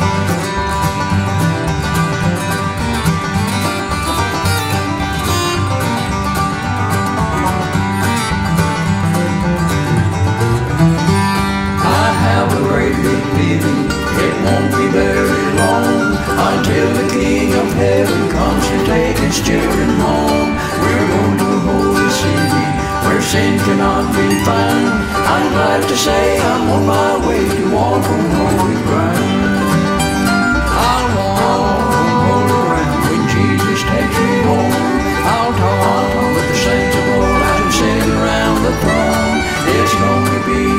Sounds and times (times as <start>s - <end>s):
Bluegrass: 0.0s - 40.7s.